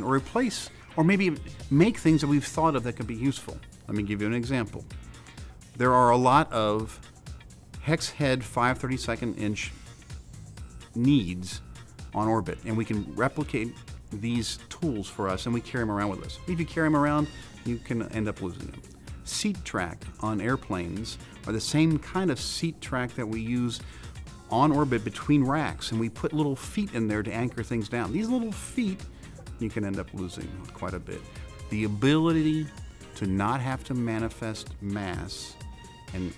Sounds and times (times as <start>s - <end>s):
Speech: 0.0s - 4.8s, 5.8s - 7.0s, 7.8s - 9.8s, 11.0s - 11.6s, 12.2s - 23.8s, 24.5s - 29.0s, 29.6s - 36.3s
Music: 0.0s - 36.3s.